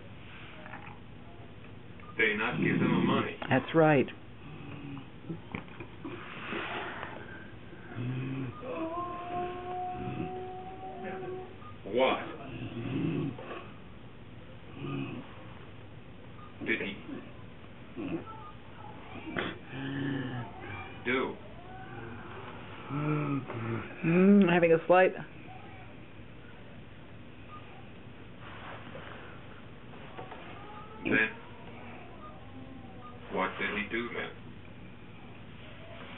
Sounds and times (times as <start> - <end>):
Inside, small room: 0.0 - 36.1.